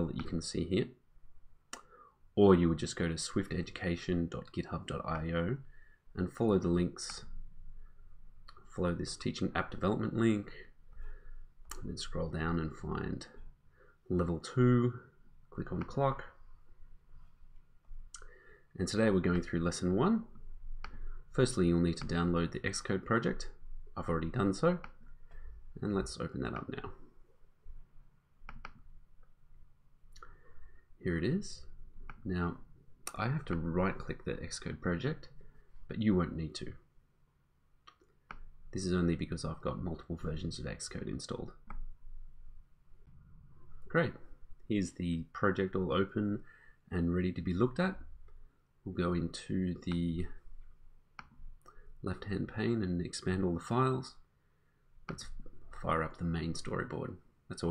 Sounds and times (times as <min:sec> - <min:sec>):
Speech: 0:00.0 - 0:01.0, 0:02.4 - 0:07.4, 0:08.5 - 0:10.8, 0:11.7 - 0:13.5, 0:14.1 - 0:16.4, 0:18.2 - 0:20.4, 0:21.3 - 0:25.0, 0:25.8 - 0:27.1, 0:31.0 - 0:36.9, 0:38.7 - 0:41.6, 0:43.9 - 0:48.1, 0:48.8 - 0:50.5, 0:52.0 - 0:54.3, 0:55.1 - 0:57.7.